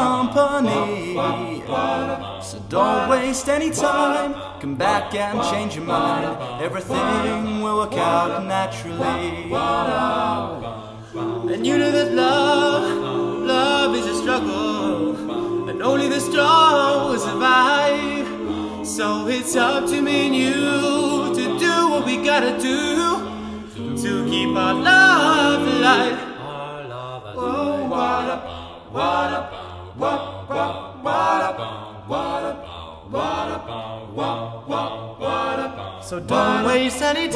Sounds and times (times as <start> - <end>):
Choir: 0.0 - 37.3.